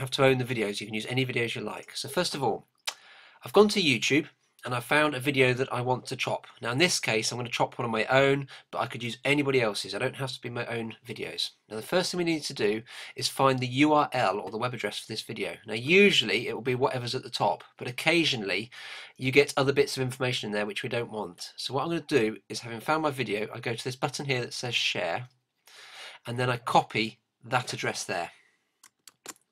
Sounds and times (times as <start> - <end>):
Speech: 0.0 - 2.6, 3.4 - 25.3, 26.2 - 28.4.